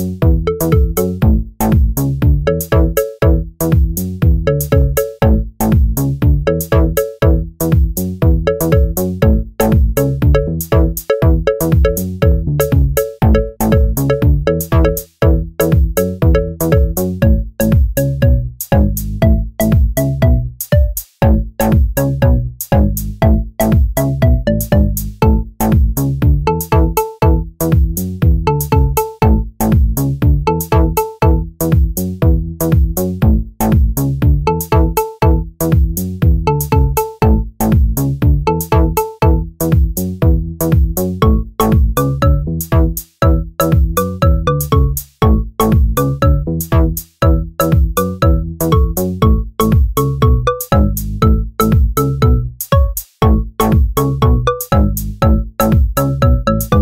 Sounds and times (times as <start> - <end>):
Music: 0.0 - 56.8.